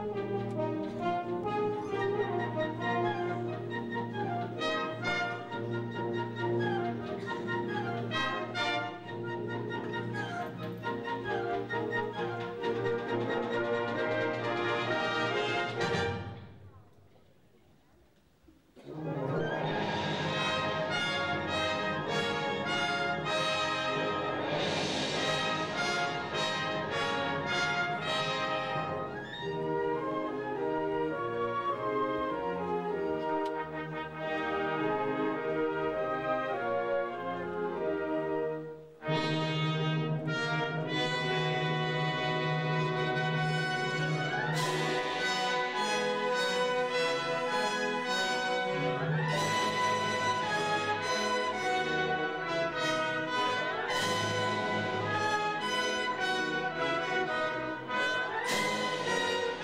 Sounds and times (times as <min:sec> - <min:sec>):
Music: 0:00.0 - 0:17.0, 0:18.8 - 0:59.6.